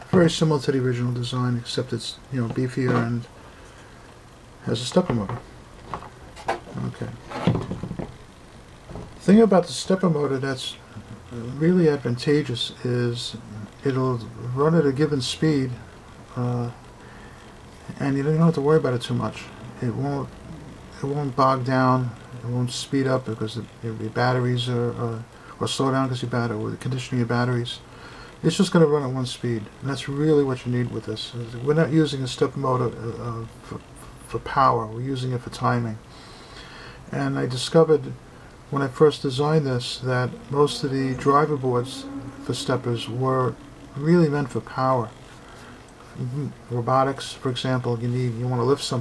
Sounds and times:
Speech: 0.0s - 3.3s, 4.6s - 5.4s, 6.7s - 7.5s, 9.2s - 16.8s, 17.8s - 36.1s, 37.1s - 45.2s, 46.2s - 49.0s.

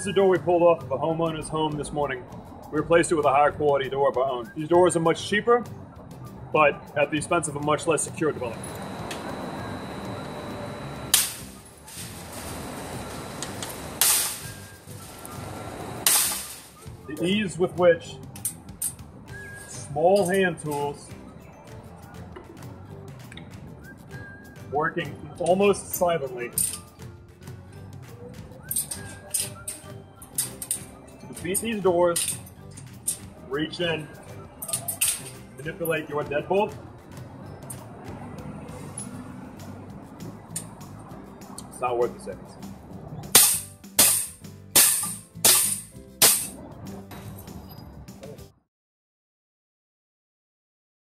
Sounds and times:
Speech: 0.0s - 5.6s, 6.6s - 8.6s, 17.1s - 18.2s, 19.7s - 21.1s, 24.7s - 26.6s, 31.4s - 32.2s, 33.5s - 34.1s, 35.6s - 36.8s, 41.7s - 42.5s.

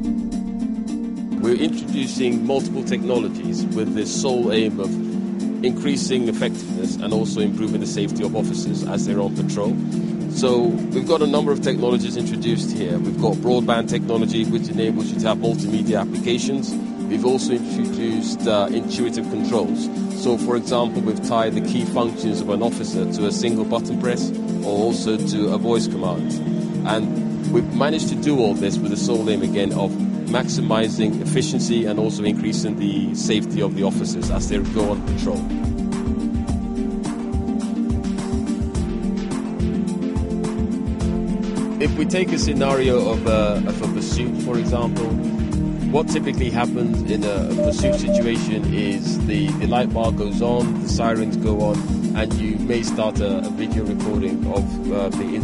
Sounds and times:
Music: 0.0s - 55.4s
Speech: 1.4s - 5.0s, 5.6s - 35.5s, 41.8s - 45.2s, 45.9s - 55.4s.

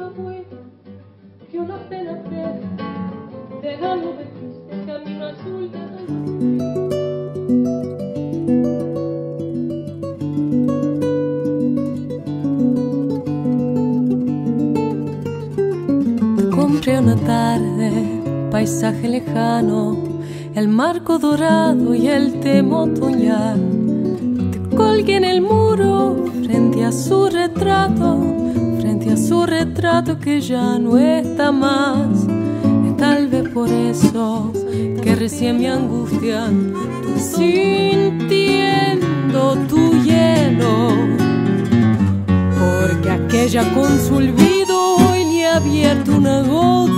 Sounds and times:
Acoustic guitar: 0.0s - 46.9s.

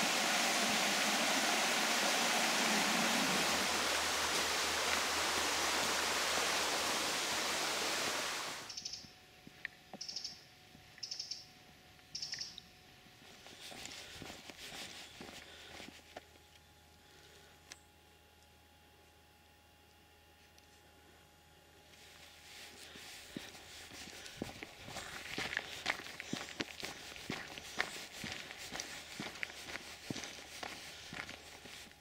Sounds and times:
Walk, footsteps: 13.2s - 16.4s, 21.9s - 32.0s.

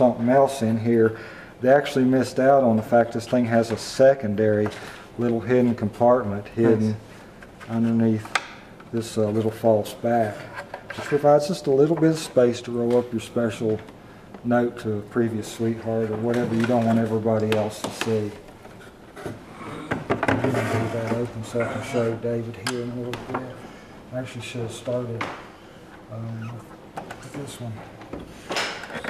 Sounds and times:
Speech: 0.0s - 7.0s, 7.7s - 18.4s, 20.4s - 25.3s, 26.1s - 27.9s.

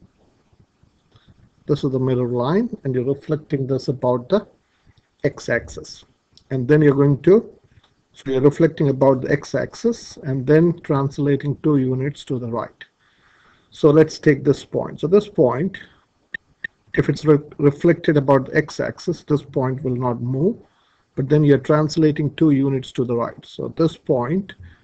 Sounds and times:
Speech: 1.7s - 4.5s, 5.2s - 7.6s, 8.2s - 12.9s, 13.8s - 15.9s, 17.0s - 20.6s, 21.2s - 24.7s.

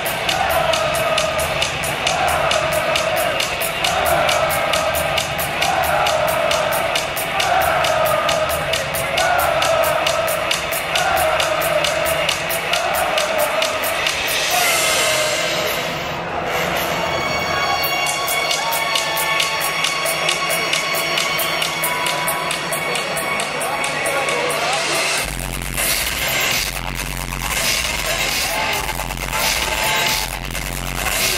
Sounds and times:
Techno: 0.0s - 31.3s
Speech: 20.0s - 25.2s.

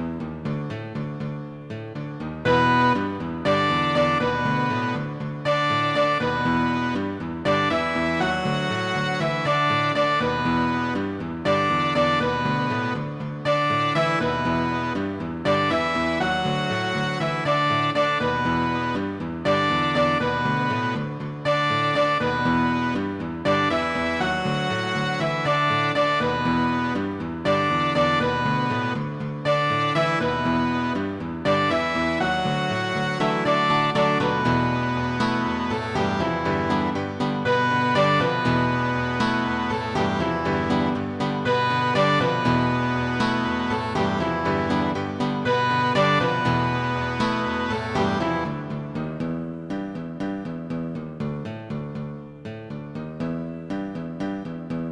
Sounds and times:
Soundtrack music: 0.0s - 51.2s
Background music: 0.0s - 54.9s
Cello: 0.0s - 54.9s.

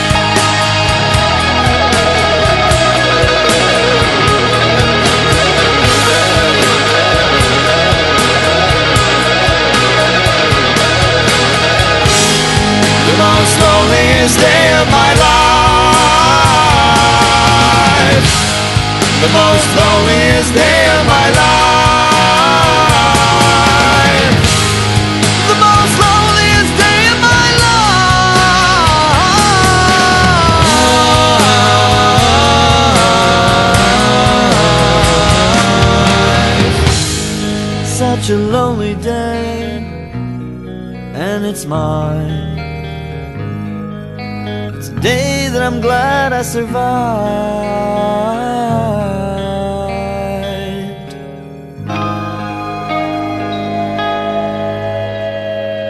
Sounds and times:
Music: 0.0s - 55.8s.

